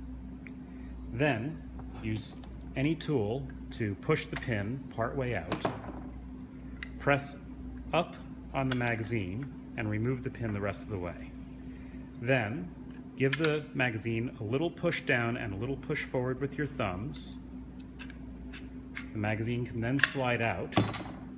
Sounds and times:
Speech: 1.2s - 5.7s, 7.0s - 11.3s, 12.2s - 17.4s, 19.1s - 20.9s.

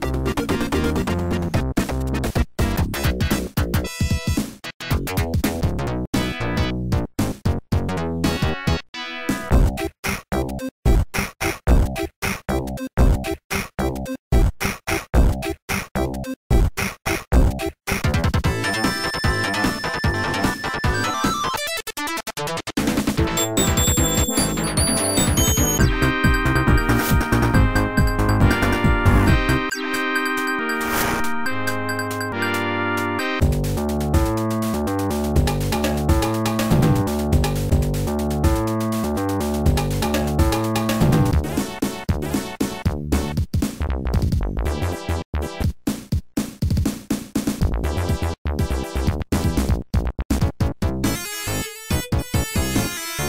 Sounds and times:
Music: 0.0s - 53.2s.

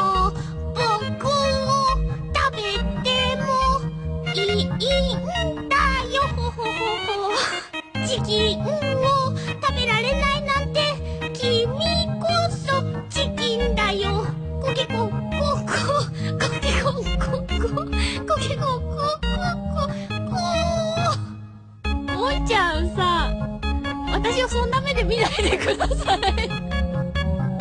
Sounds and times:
Music: 0.0s - 27.6s
Speech: 24.1s - 25.4s.

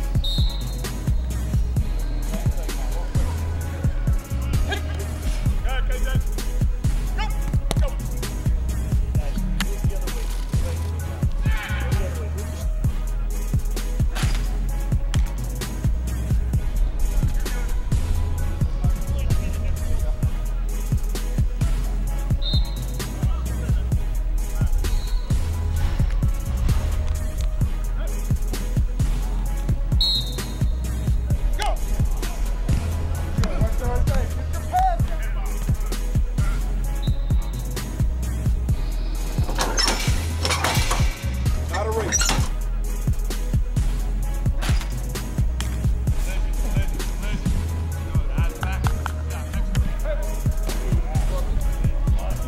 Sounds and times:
Music: 0.0s - 52.4s.

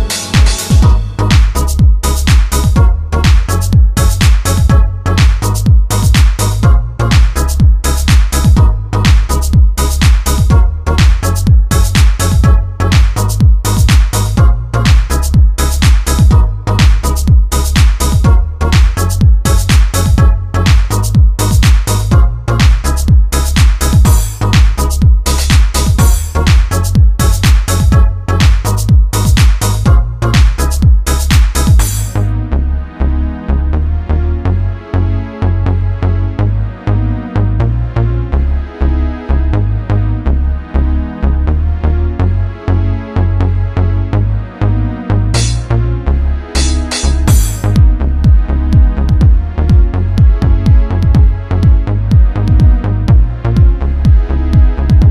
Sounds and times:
House music: 0.0s - 33.5s, 44.3s - 55.1s.

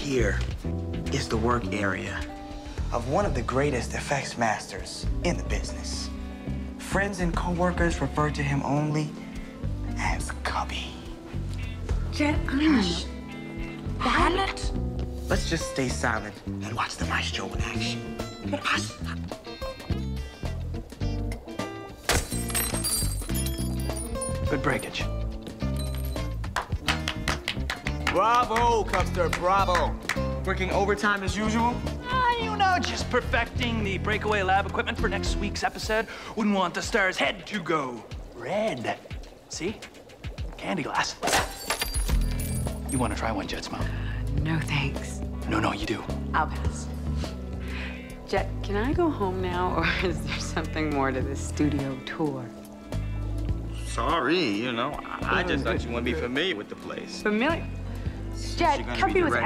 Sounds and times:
Music: 0.0s - 59.4s.

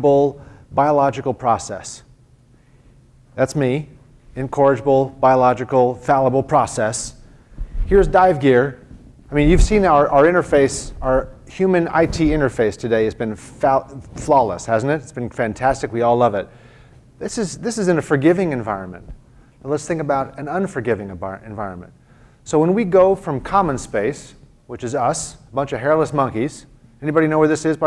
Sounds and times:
Speech: 0.0s - 2.1s, 3.4s - 7.2s, 7.9s - 16.5s, 17.2s - 27.8s.

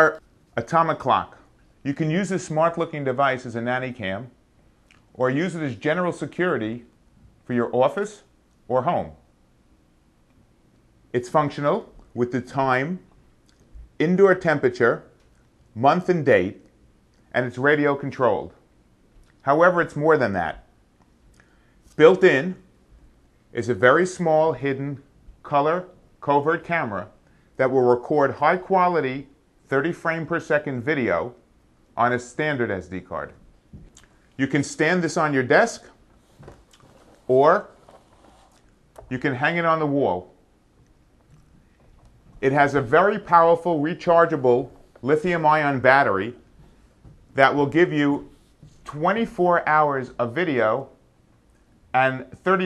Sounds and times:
Speech: 0.0s - 9.3s, 11.1s - 13.1s, 14.0s - 15.2s, 15.8s - 16.7s, 17.3s - 18.6s, 19.4s - 20.7s, 22.0s - 22.7s, 23.5s - 31.4s, 32.0s - 33.5s, 34.4s - 36.0s, 37.2s - 37.8s, 39.0s - 40.4s, 42.4s - 46.5s, 47.4s - 51.0s, 51.9s - 52.6s.

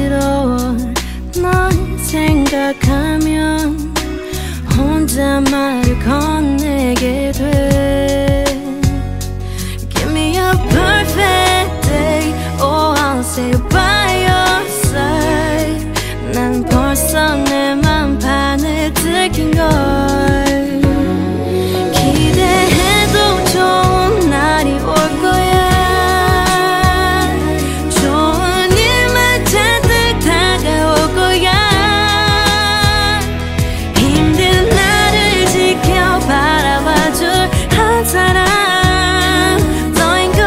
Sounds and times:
Music: 0.0s - 40.4s.

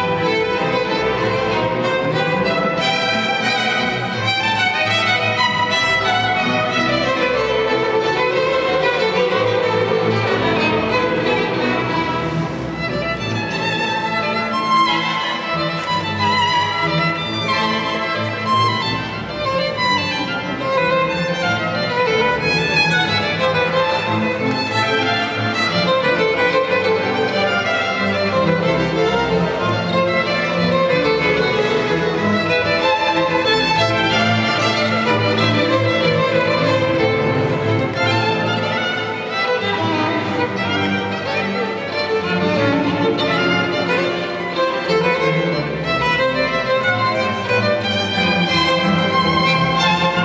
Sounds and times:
Violin, fiddle: 0.0s - 50.2s.

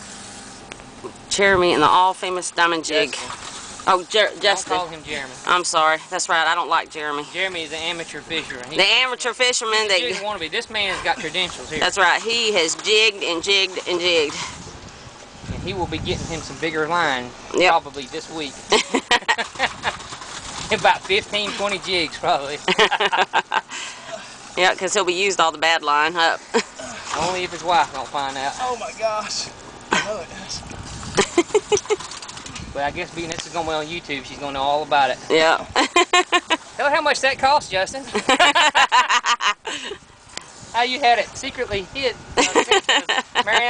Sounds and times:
Outside, rural or natural: 0.0s - 43.6s.

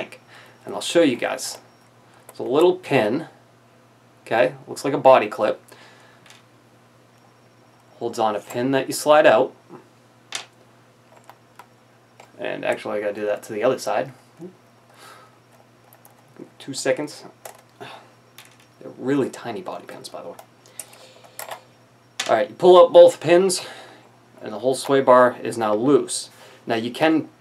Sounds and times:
Inside, small room: 0.0s - 27.4s
Speech: 4.3s - 5.6s, 12.4s - 14.2s, 16.6s - 17.3s, 18.8s - 20.4s, 24.4s - 27.3s.

